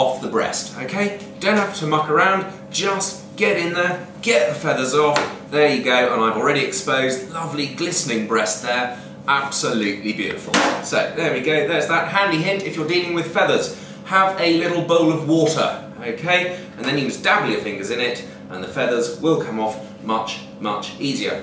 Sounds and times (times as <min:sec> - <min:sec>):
Speech: 0:00.0 - 0:21.4.